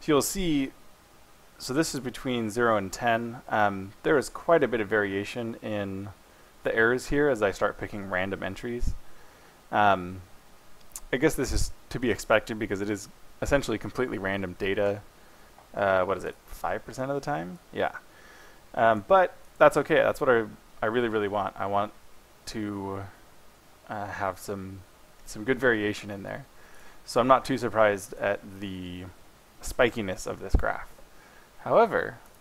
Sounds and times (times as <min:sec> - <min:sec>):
Speech: 0:00.0 - 0:00.8, 0:01.6 - 0:09.0, 0:09.7 - 0:10.3, 0:11.0 - 0:15.0, 0:15.7 - 0:18.0, 0:18.8 - 0:23.2, 0:23.9 - 0:26.5, 0:27.1 - 0:31.0, 0:31.6 - 0:32.2.